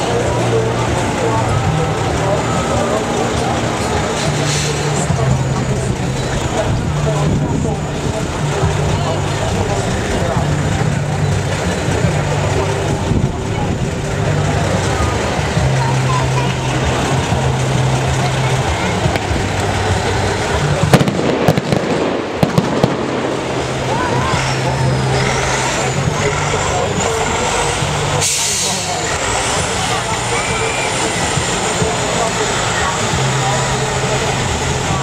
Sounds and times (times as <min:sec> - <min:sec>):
Speech: 0:00.0 - 0:35.0
Truck: 0:00.0 - 0:35.0.